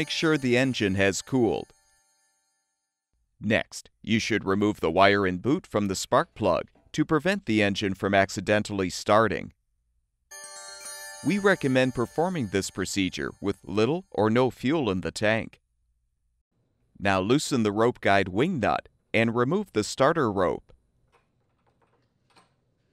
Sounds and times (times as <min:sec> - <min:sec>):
Speech: 0:00.0 - 0:01.7, 0:03.4 - 0:09.6, 0:11.3 - 0:15.6, 0:17.0 - 0:20.7.